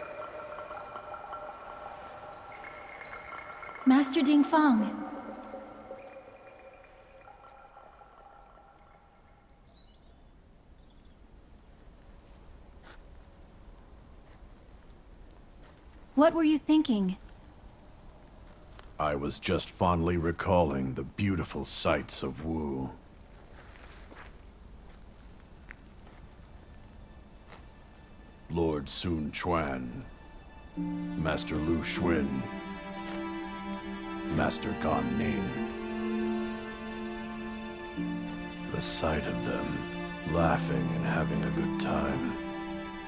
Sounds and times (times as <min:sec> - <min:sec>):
Speech: 0:03.9 - 0:05.0, 0:16.2 - 0:17.2, 0:19.0 - 0:23.0, 0:28.5 - 0:30.1, 0:31.2 - 0:32.5, 0:34.3 - 0:35.6, 0:38.7 - 0:42.4.